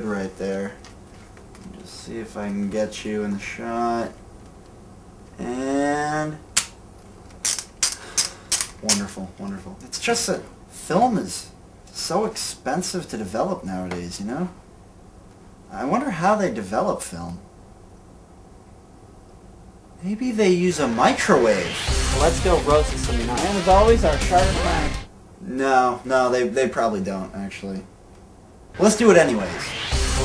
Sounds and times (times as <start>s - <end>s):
Speech: 0.0s - 0.8s, 1.6s - 4.2s, 5.4s - 6.4s, 8.8s - 14.6s, 15.7s - 17.4s, 20.0s - 27.9s, 28.8s - 29.8s
Music: 21.7s - 25.1s, 29.3s - 30.2s.